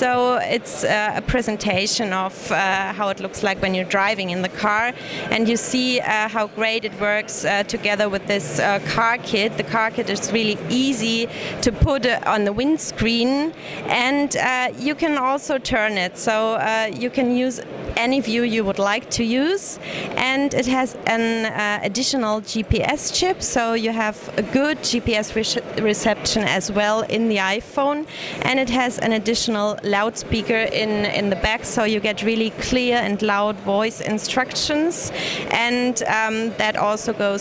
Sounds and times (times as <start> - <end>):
Speech: 0.0 - 37.4.